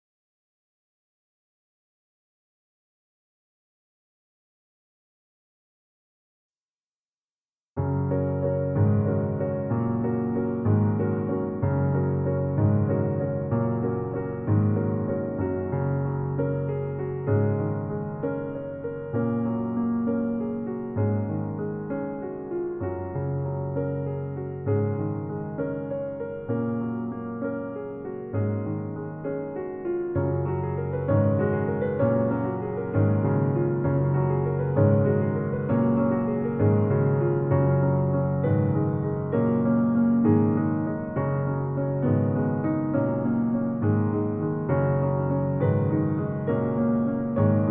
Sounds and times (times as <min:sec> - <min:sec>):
Music: 0:07.8 - 0:47.7.